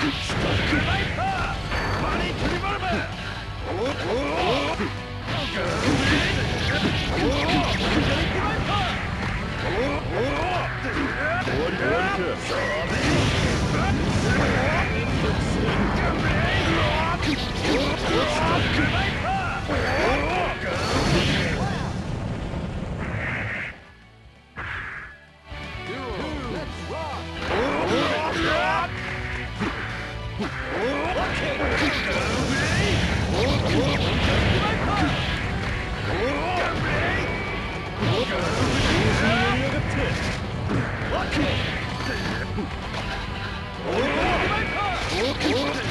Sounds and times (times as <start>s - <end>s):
Music: 0.0s - 45.9s.